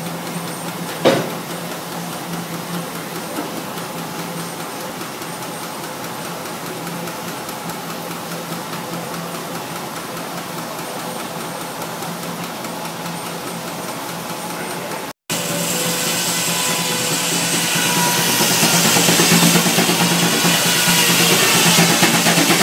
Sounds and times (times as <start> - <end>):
Engine: 0.0 - 22.6.